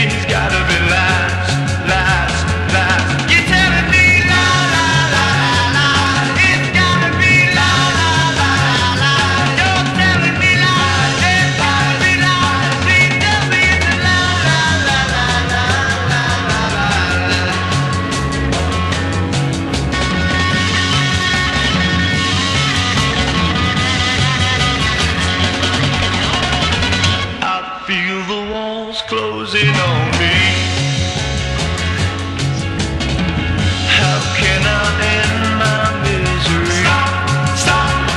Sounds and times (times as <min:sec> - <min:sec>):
Psychedelic rock: 0:00.0 - 0:38.1.